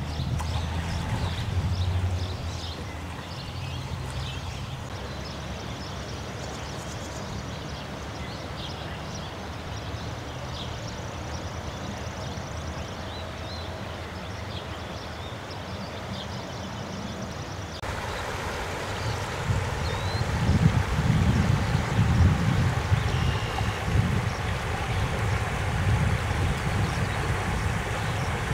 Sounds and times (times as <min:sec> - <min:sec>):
Boat, Water vehicle: 0:00.0 - 0:28.5.